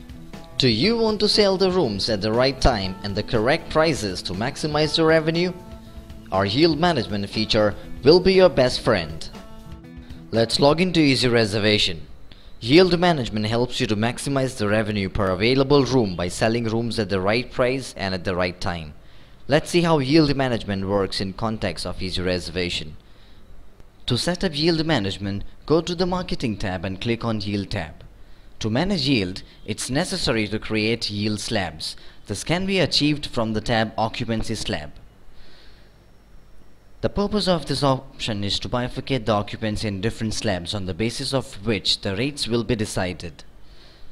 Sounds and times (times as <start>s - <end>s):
Speech: 0.6s - 5.6s, 6.3s - 9.4s, 10.4s - 23.0s, 24.1s - 35.0s, 37.0s - 43.5s.